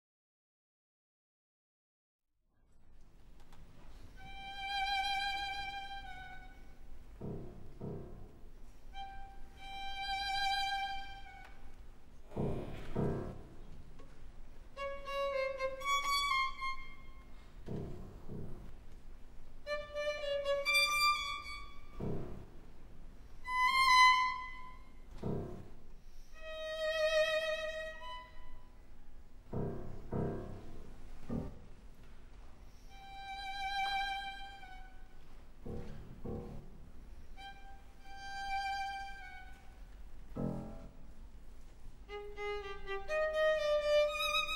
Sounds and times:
Violin, fiddle: 4.1s - 8.1s, 8.8s - 11.8s, 14.7s - 18.0s, 19.6s - 22.6s, 23.3s - 29.0s, 32.7s - 35.4s, 37.2s - 40.0s, 42.1s - 44.5s.

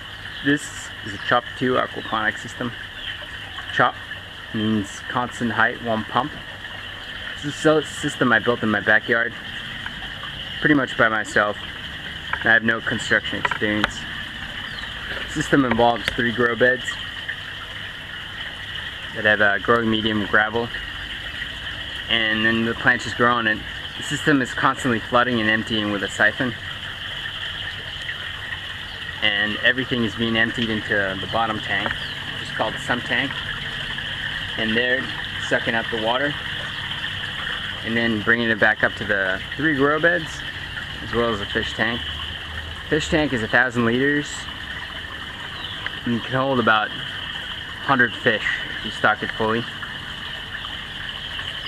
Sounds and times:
Speech: 0.5s - 2.8s, 3.8s - 6.4s, 7.4s - 9.4s, 10.6s - 11.6s, 12.4s - 14.0s, 15.3s - 17.0s, 19.2s - 20.7s, 22.1s - 26.6s, 29.2s - 33.4s, 34.6s - 36.4s, 37.8s - 42.1s, 42.9s - 44.5s, 46.0s - 47.1s, 47.8s - 49.7s.

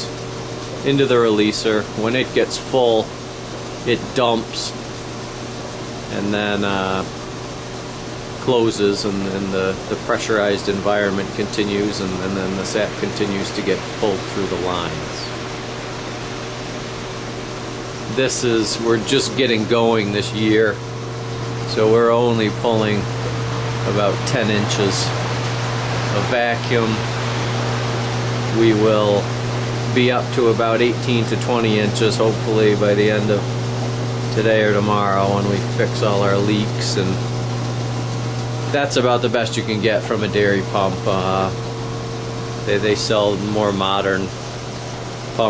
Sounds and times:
Water: 0.0s - 18.0s
Pump (liquid): 0.0s - 45.4s.

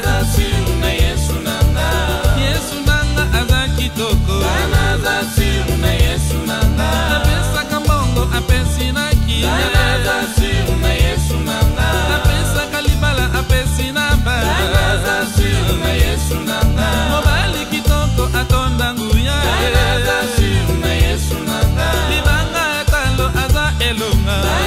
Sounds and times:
Folk music: 0.0s - 24.6s.

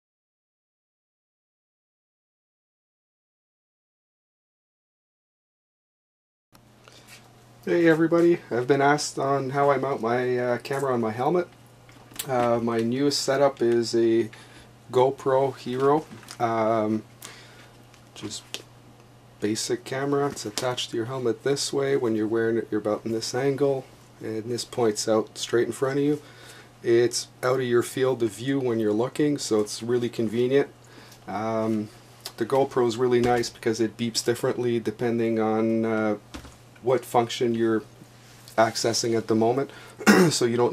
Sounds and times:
Speech: 7.6s - 11.6s, 12.2s - 17.1s, 18.2s - 18.6s, 19.4s - 26.2s, 26.8s - 36.2s, 36.8s - 37.9s, 38.5s - 40.7s.

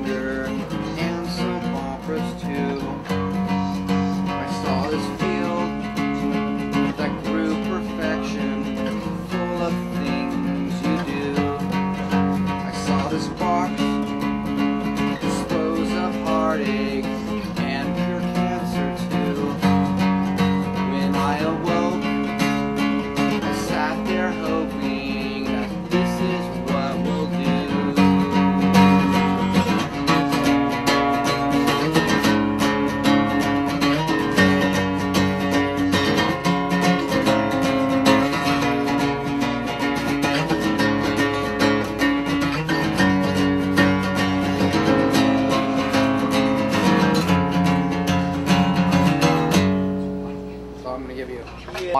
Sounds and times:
Male singing: 0.0s - 32.3s
Music: 0.0s - 51.9s.

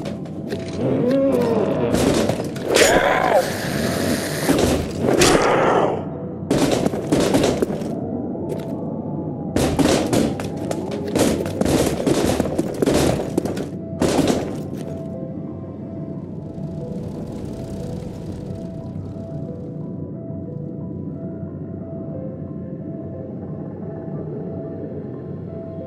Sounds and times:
Outside, urban or manmade: 0.0s - 25.8s.

